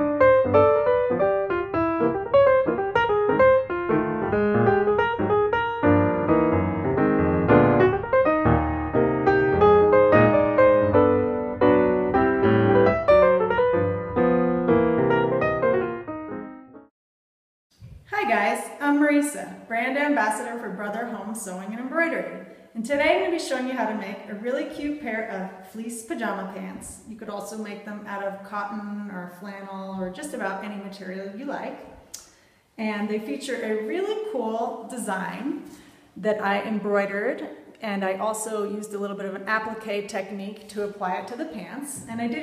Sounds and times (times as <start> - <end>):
Speech: 18.1 - 31.9, 32.8 - 35.6, 36.2 - 42.4.